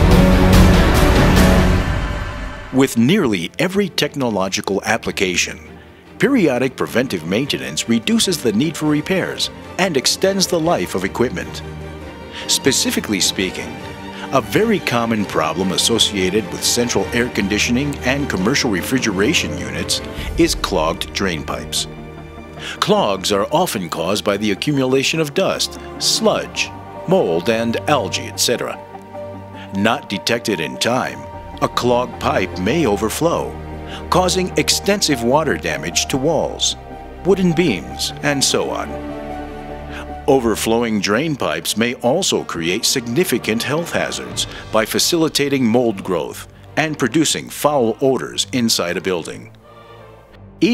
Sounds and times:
Music: 0:00.0 - 0:50.7
Speech: 0:02.7 - 0:11.6, 0:12.4 - 0:21.9, 0:22.7 - 0:28.8, 0:29.6 - 0:38.9, 0:40.0 - 0:49.6.

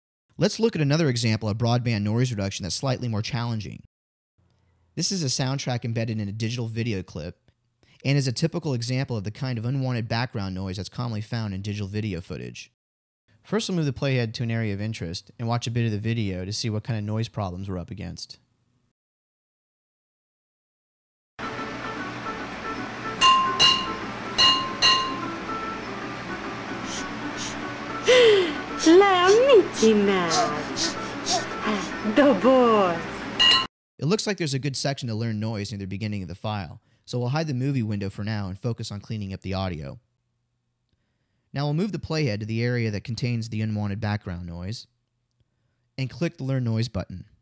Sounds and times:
Speech: 0:00.4 - 0:03.9, 0:05.0 - 0:07.4, 0:08.0 - 0:12.8, 0:13.5 - 0:18.4, 0:28.8 - 0:30.8, 0:31.7 - 0:33.1, 0:34.0 - 0:40.0, 0:41.6 - 0:44.9, 0:46.0 - 0:47.4
Music: 0:21.4 - 0:33.7.

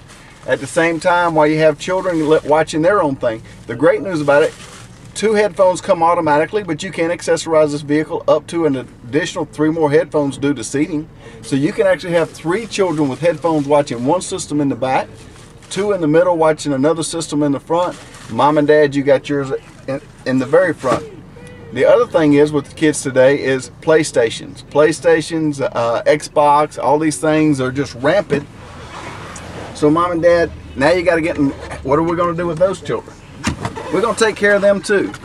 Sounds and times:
Speech: 0:00.4 - 0:04.6, 0:05.2 - 0:28.5, 0:29.8 - 0:33.1, 0:33.8 - 0:35.2.

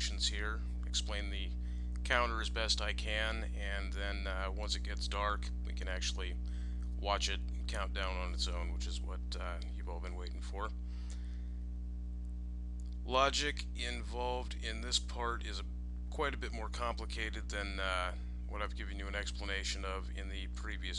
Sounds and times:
Speech: 0:00.0 - 0:06.4, 0:07.0 - 0:10.8, 0:13.1 - 0:20.9.

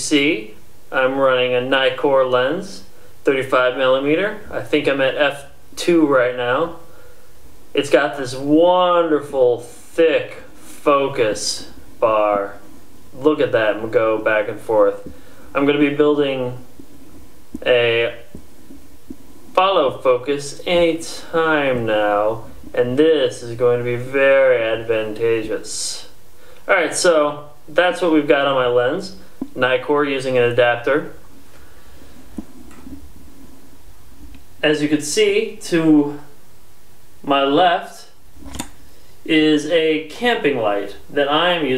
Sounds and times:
Speech: 0:00.0 - 0:06.9, 0:07.7 - 0:16.7, 0:17.6 - 0:18.4, 0:19.6 - 0:31.2, 0:34.6 - 0:36.4, 0:37.2 - 0:38.2, 0:39.2 - 0:41.7.

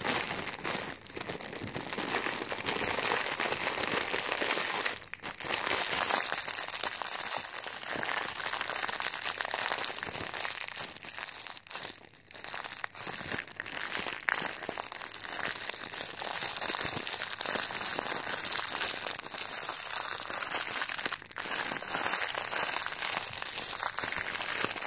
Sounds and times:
Crumpling, crinkling: 0:00.0 - 0:24.8.

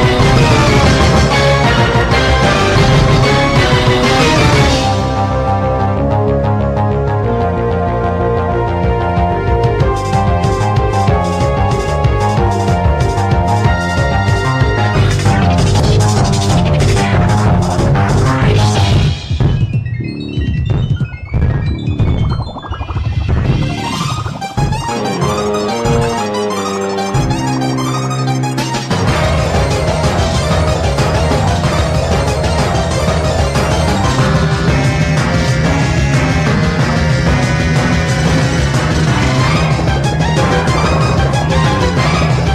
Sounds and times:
Video game music: 0:00.0 - 0:42.5.

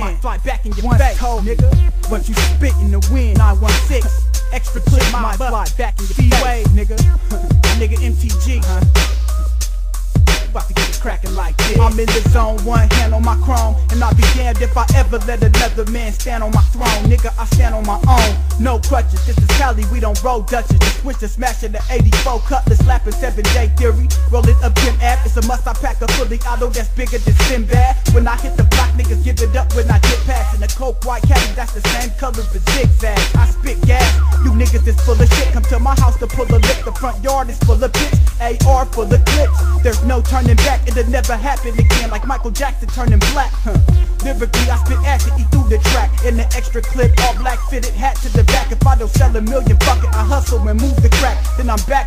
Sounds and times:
Music: 0:00.0 - 0:52.0.

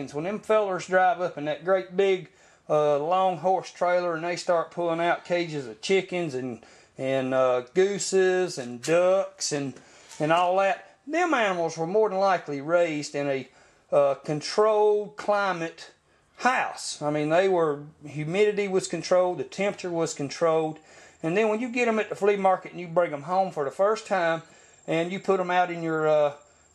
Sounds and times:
Speech: 0:00.0 - 0:26.4.

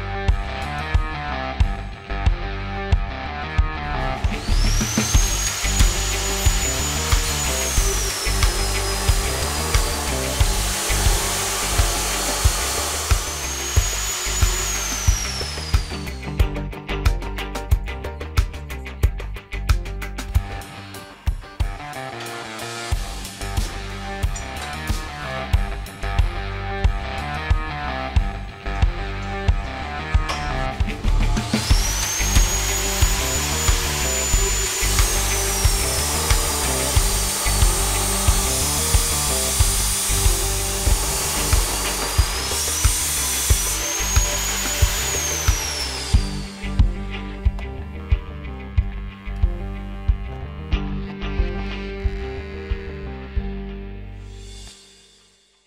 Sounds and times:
Music: 0:00.0 - 0:55.6
Power tool: 0:03.8 - 0:16.6, 0:20.0 - 0:48.1.

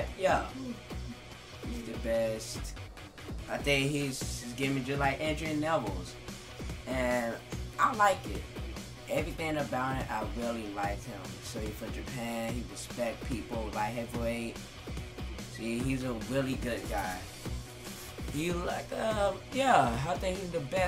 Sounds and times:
Speech: 0:00.0 - 0:00.8, 0:01.7 - 0:02.7, 0:03.5 - 0:06.1, 0:06.9 - 0:08.5, 0:09.1 - 0:14.6, 0:15.5 - 0:17.3, 0:18.3 - 0:20.8
Music: 0:00.0 - 0:20.8.

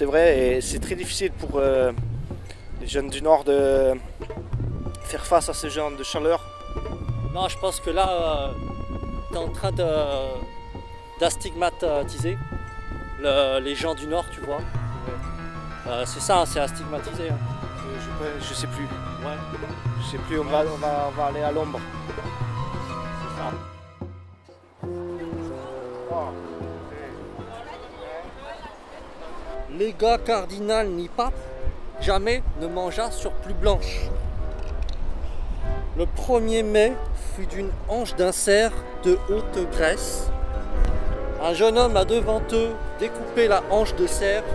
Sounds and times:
Music: 0:00.0 - 0:44.5.

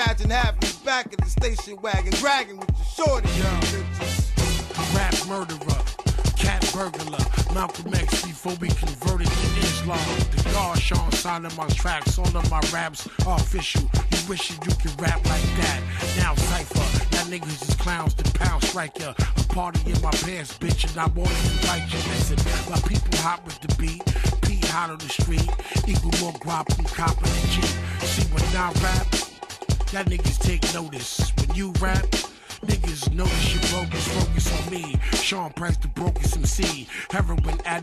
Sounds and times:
Music: 0:00.0 - 0:37.8
Rapping: 0:00.0 - 0:37.8.

